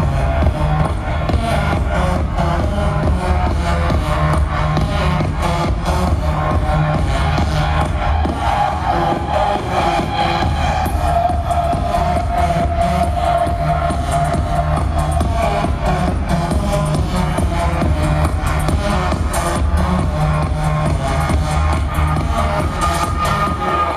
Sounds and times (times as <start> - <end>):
Soundtrack music: 0.0 - 23.9.